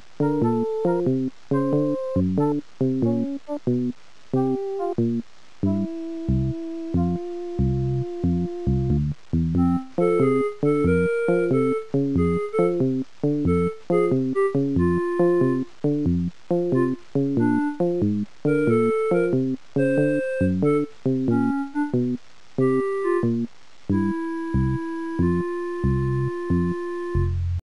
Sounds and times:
Video game music: 0:00.2 - 0:27.4.

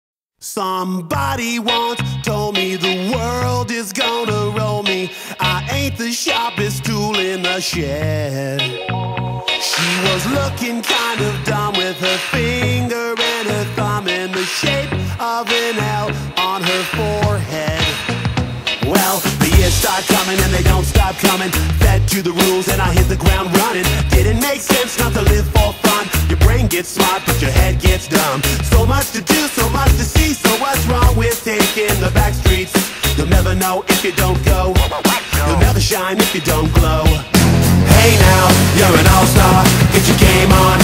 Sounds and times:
Reggae: 0:01.1 - 0:40.8.

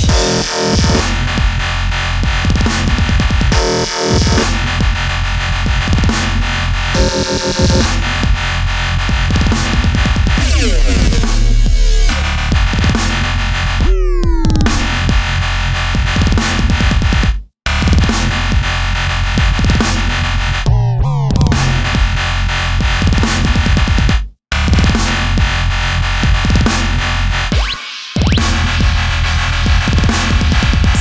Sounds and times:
Dubstep: 0:00.0 - 0:31.0.

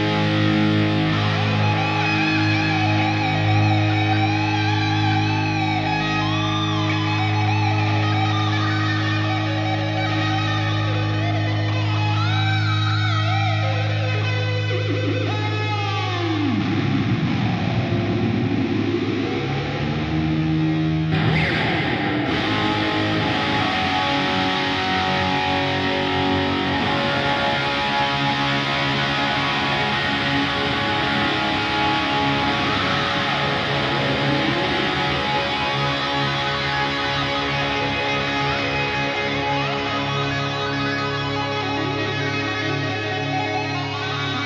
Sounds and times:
Music: 0:00.0 - 0:44.4.

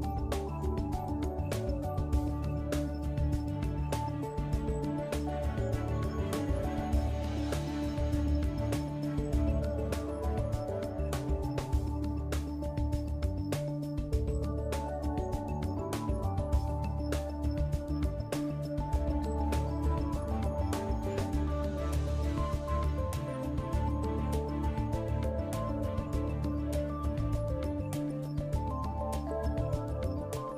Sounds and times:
Music: 0:00.0 - 0:30.5.

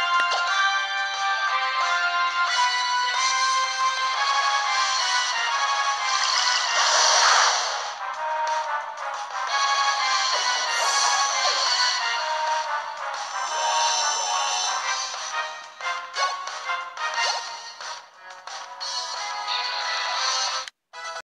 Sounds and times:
Music: 0:00.0 - 0:21.2.

